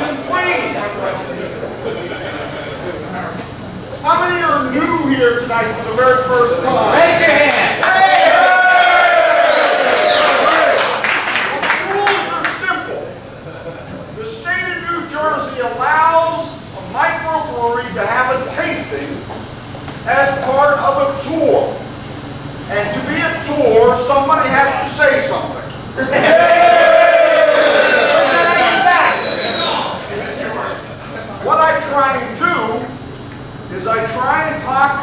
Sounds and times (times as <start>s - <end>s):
Male speech, man speaking: 0.0s - 2.0s, 4.0s - 7.8s, 11.5s - 13.2s, 14.2s - 19.2s, 20.1s - 21.8s, 22.7s - 25.7s, 28.3s - 30.8s, 31.4s - 33.0s, 33.7s - 35.0s
Narration, monologue: 3.8s - 7.8s, 11.5s - 13.3s, 14.1s - 26.0s, 30.2s - 35.0s.